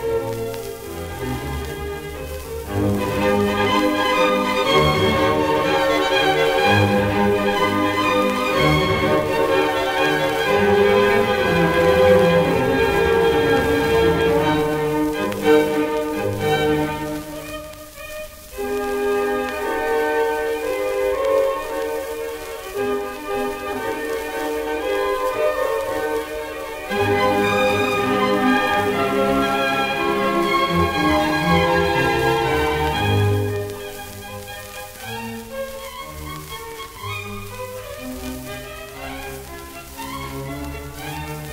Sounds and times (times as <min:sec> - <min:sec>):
Violin, fiddle: 0:00.0 - 0:41.5.